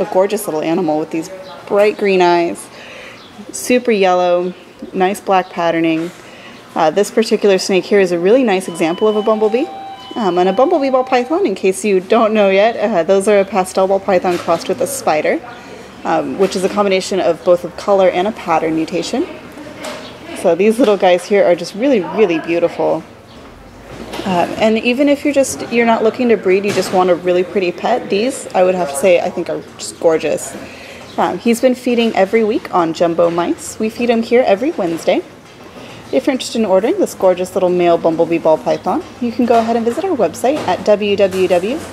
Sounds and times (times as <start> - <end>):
Speech: 0.0 - 2.8, 3.4 - 6.1, 6.8 - 23.1, 24.2 - 35.3, 36.1 - 41.9
Inside, large room or hall: 8.3 - 12.1.